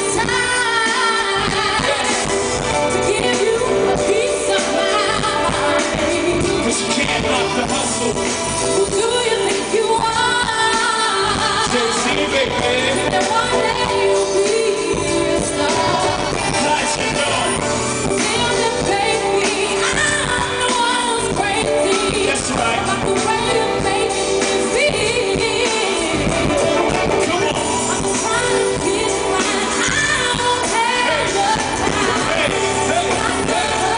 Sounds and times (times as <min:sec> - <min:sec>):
Music: 0:00.0 - 0:33.9.